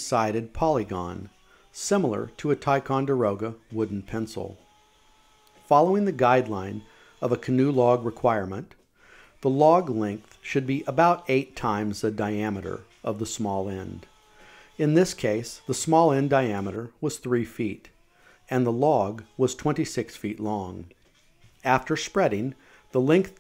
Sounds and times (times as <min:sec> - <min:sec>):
Speech: 0:00.0 - 0:04.6, 0:05.7 - 0:08.8, 0:09.4 - 0:14.1, 0:14.8 - 0:17.9, 0:18.5 - 0:21.0, 0:21.6 - 0:23.4.